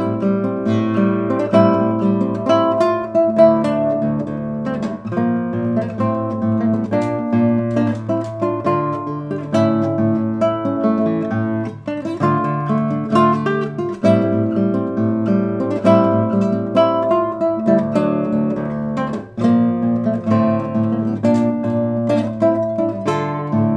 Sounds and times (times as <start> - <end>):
Acoustic guitar: 0.0 - 23.7.